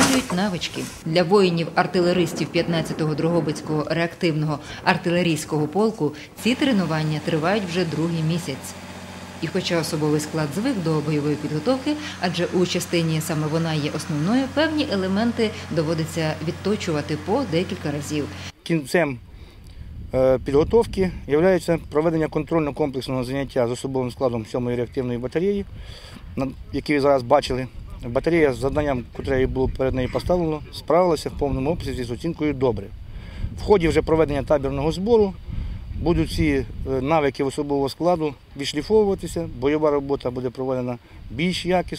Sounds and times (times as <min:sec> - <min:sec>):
Speech: 0:00.0 - 0:08.7, 0:09.4 - 0:19.2, 0:20.2 - 0:25.7, 0:26.4 - 0:32.9, 0:33.6 - 0:35.4, 0:36.0 - 0:41.9
Outside, rural or natural: 0:00.0 - 0:41.9
Outside, urban or manmade: 0:00.0 - 0:41.9.